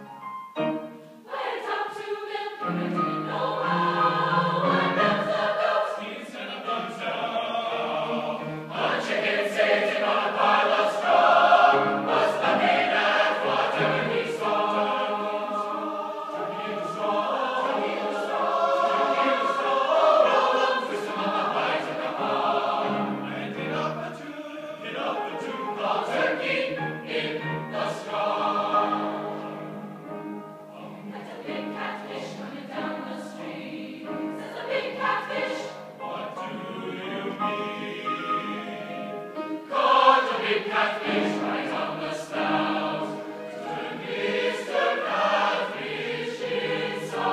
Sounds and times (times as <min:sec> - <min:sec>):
Choir: 0:00.6 - 0:47.3.